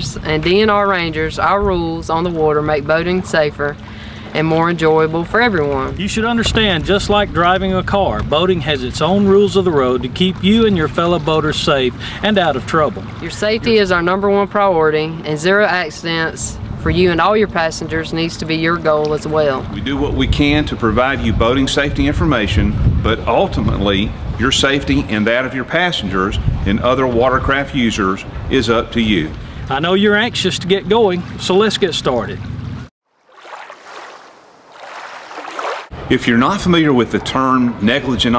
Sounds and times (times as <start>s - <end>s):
Speech: 0.0s - 3.8s, 4.4s - 32.4s, 36.1s - 38.3s.